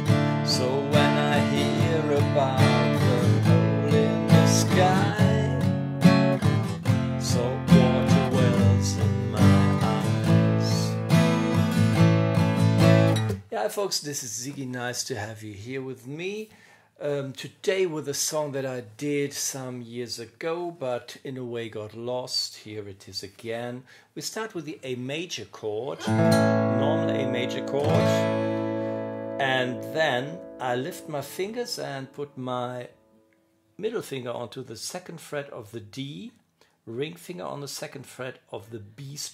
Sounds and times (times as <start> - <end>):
Strum: 0.0 - 13.4, 26.0 - 33.3
Acoustic guitar: 0.0 - 13.5, 26.0 - 33.5
Speech: 0.5 - 5.6, 7.2 - 11.0, 13.4 - 26.1, 26.7 - 28.3, 29.4 - 33.0, 33.8 - 39.3.